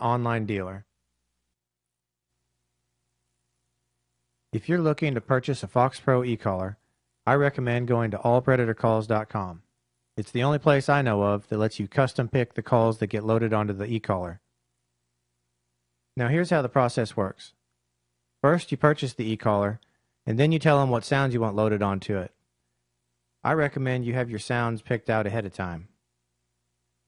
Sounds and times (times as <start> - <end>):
Speech: 0.0 - 0.9, 4.6 - 14.5, 16.2 - 17.6, 18.4 - 22.4, 23.4 - 26.0.